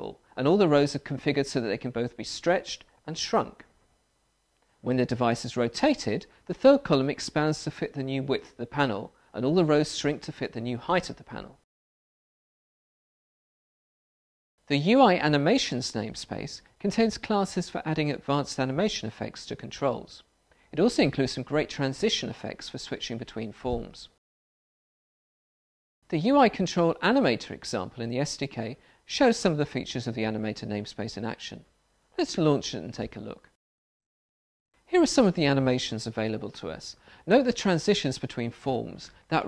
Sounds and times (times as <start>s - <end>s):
Speech: 0.0s - 3.7s, 4.8s - 11.6s, 14.7s - 24.2s, 26.1s - 33.6s, 34.9s - 39.4s
Inside, small room: 0.0s - 11.7s, 14.6s - 24.2s, 26.0s - 33.6s, 34.8s - 39.4s.